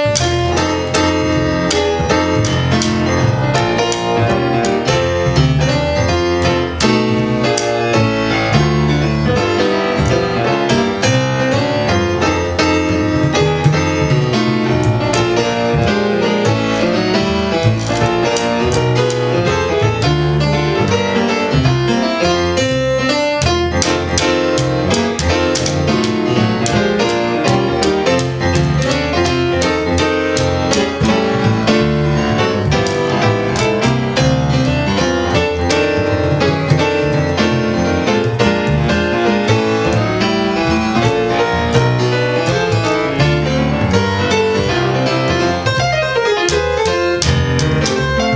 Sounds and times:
Music: 0.0s - 48.3s.

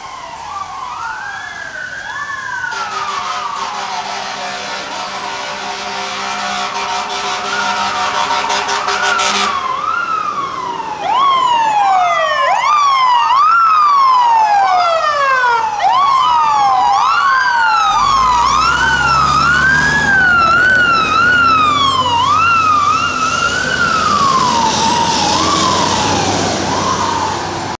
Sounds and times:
Vehicle: 0.0s - 27.7s
Engine: 17.1s - 27.7s.

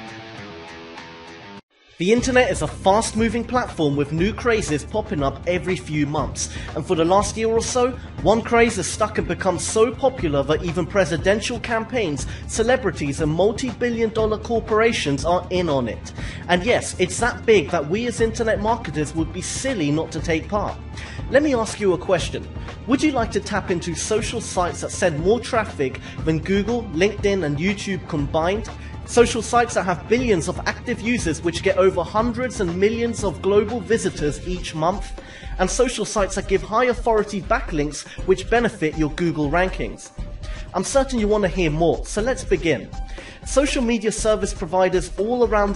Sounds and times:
Music: 0.0s - 45.7s
Speech: 2.0s - 40.1s, 40.7s - 45.7s.

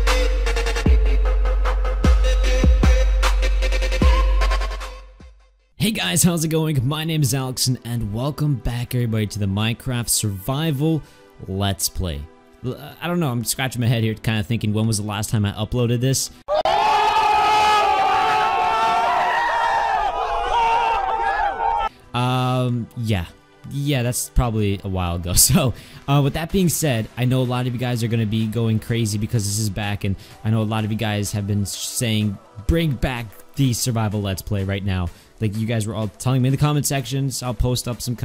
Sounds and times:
Music: 0.0s - 38.2s
Speech: 5.8s - 16.3s, 22.2s - 38.2s.

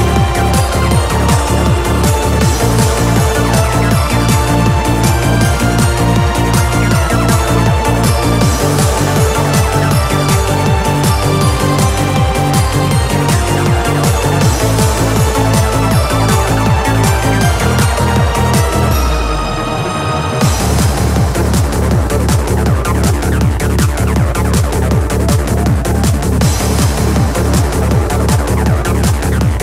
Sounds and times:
Music: 0.0s - 29.6s.

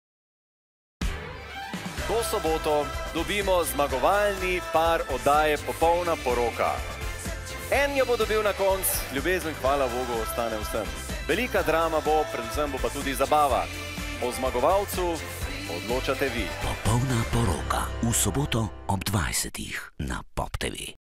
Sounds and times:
Music: 1.0s - 19.6s
Speech: 2.0s - 6.8s, 7.7s - 21.0s.

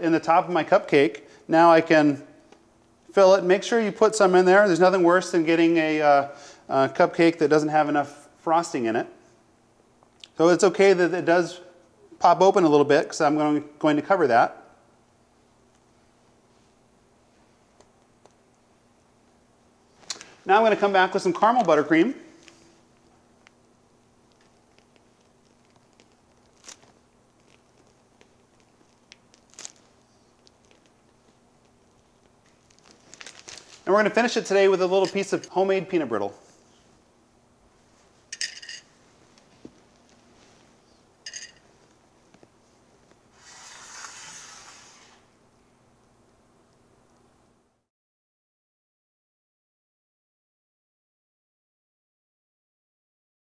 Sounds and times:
Speech: 0.0s - 2.3s, 3.1s - 9.2s, 10.3s - 14.7s, 20.5s - 22.4s, 33.8s - 36.4s.

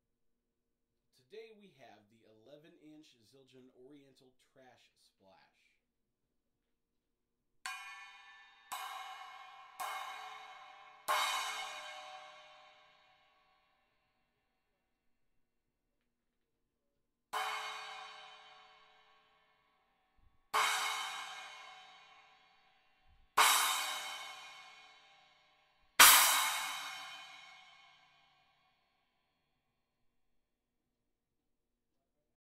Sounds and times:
Music: 7.7s - 14.3s, 17.4s - 29.1s.

